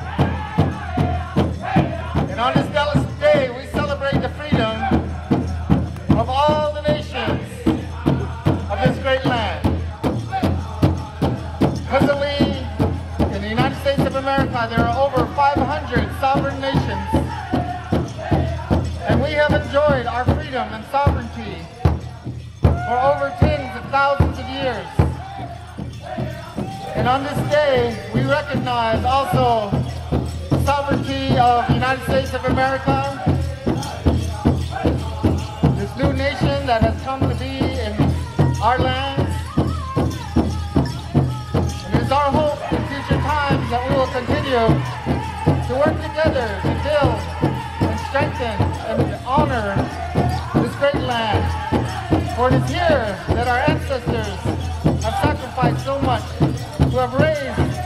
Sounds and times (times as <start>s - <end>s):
Music: 0.0s - 57.8s
Speech: 19.1s - 21.8s, 22.8s - 25.0s, 47.9s - 49.8s, 52.4s - 57.8s.